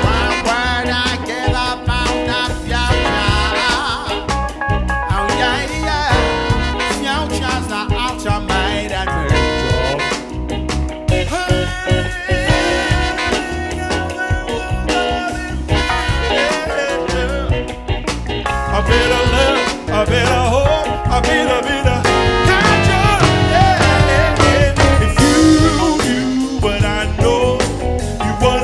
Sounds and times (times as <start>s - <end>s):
Singing: 0.0s - 4.4s, 11.3s - 17.6s, 18.7s - 28.6s
Music: 0.0s - 28.6s.